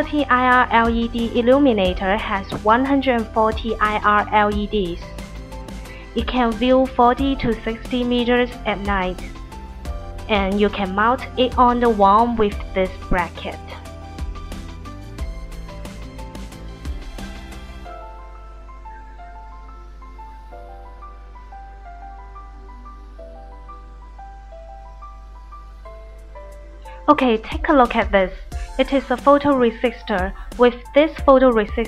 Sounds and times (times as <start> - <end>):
Music: 0.0 - 31.8.